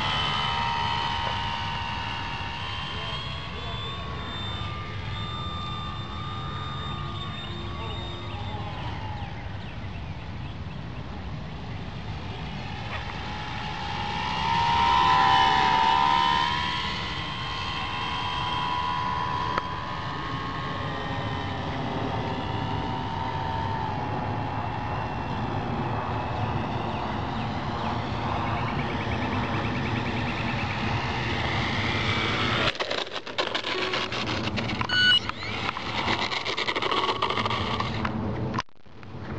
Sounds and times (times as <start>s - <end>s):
Aircraft: 0.0s - 39.3s
Outside, rural or natural: 0.0s - 39.3s.